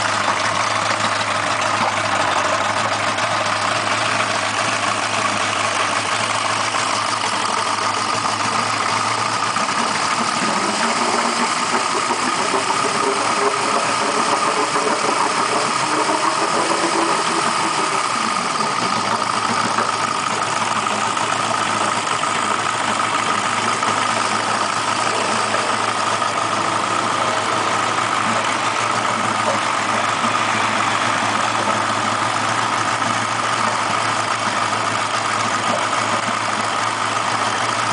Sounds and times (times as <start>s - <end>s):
Engine: 0.0s - 37.9s.